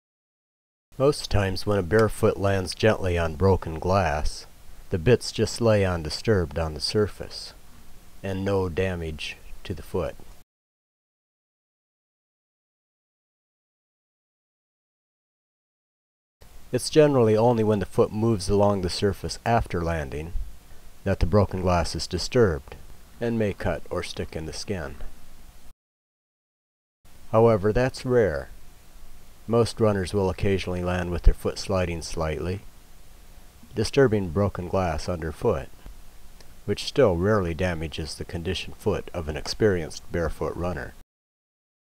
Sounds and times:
Speech: 0:01.0 - 0:07.6, 0:08.2 - 0:10.2, 0:16.8 - 0:20.4, 0:21.0 - 0:25.1, 0:27.3 - 0:28.5, 0:29.5 - 0:32.7, 0:33.7 - 0:35.8, 0:36.7 - 0:41.0.

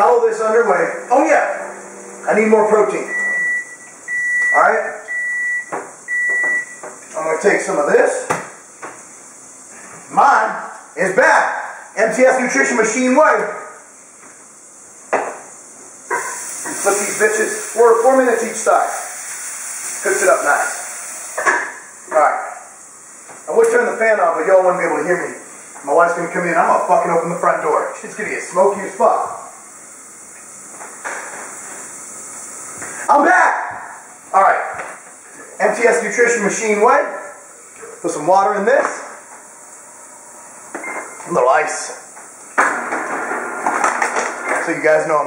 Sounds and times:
Hiss: 0:13.7 - 0:25.9, 0:27.9 - 0:33.3.

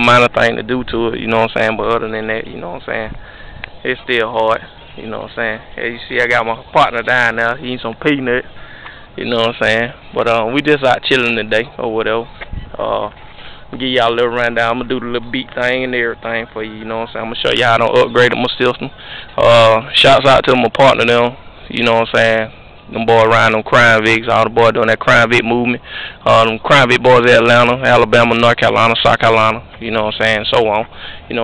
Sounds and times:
Speech: 0:00.0 - 0:03.2, 0:03.8 - 0:08.4, 0:09.2 - 0:13.2, 0:13.8 - 0:31.4.

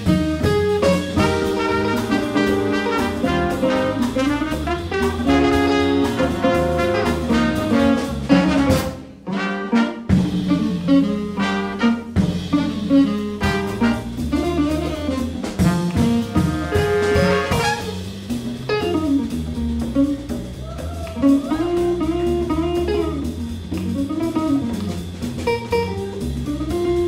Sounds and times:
Music: 0:00.0 - 0:27.0.

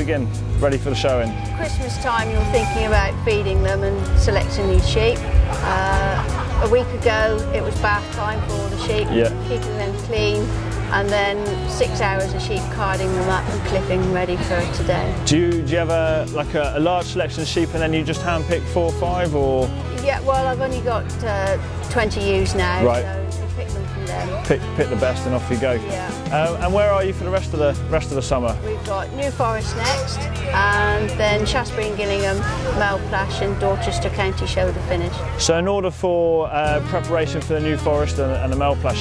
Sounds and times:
Music: 0:00.0 - 0:39.0.

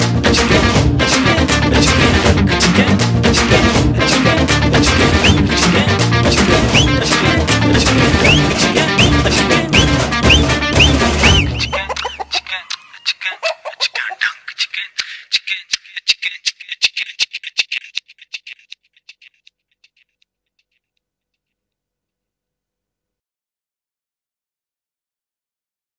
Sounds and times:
Music: 0:00.0 - 0:12.0.

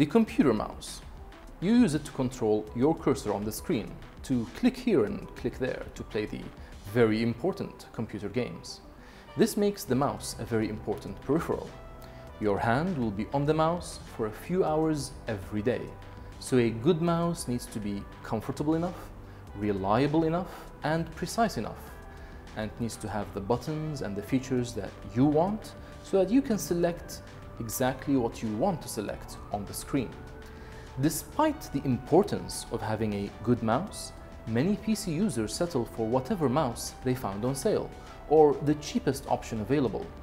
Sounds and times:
Speech: 0:00.0 - 0:08.8, 0:09.4 - 0:11.8, 0:12.4 - 0:21.9, 0:22.6 - 0:30.1, 0:31.0 - 0:40.1
Music: 0:00.0 - 0:40.2.

